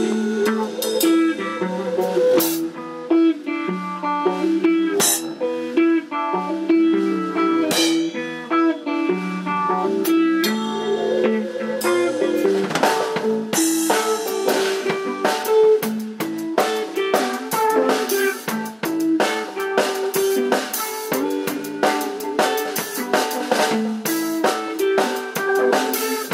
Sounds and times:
Rock and roll: 0.0 - 26.3.

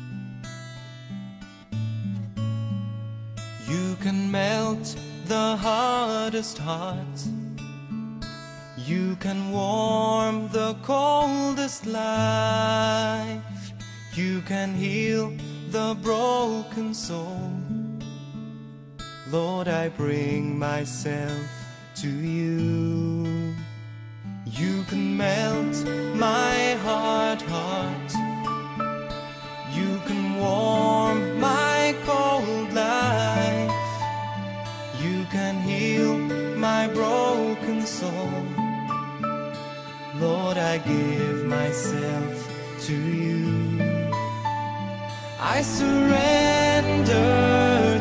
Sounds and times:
Music: 0.0 - 48.0.

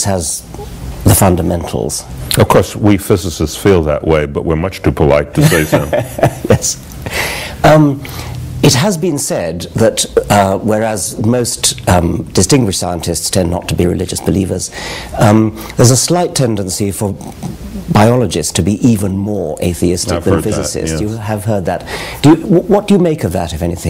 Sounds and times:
Speech: 0.0 - 5.9, 8.6 - 23.8.

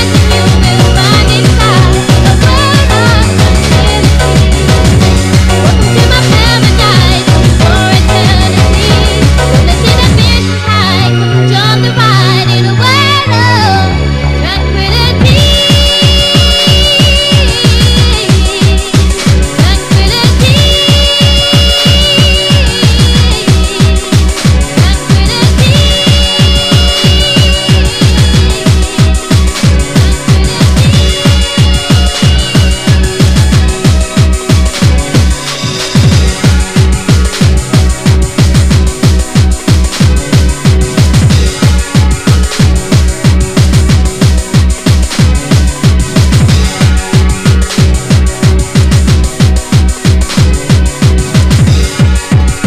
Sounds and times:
Electronic music: 0.0 - 52.6.

